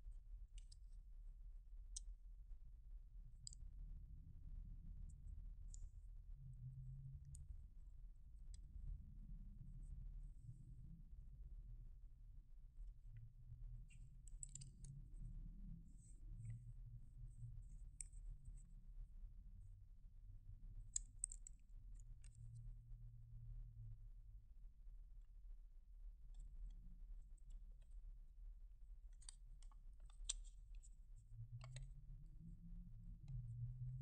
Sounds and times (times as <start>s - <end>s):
Inside, small room: 0.0s - 34.0s
Silence: 0.0s - 34.0s.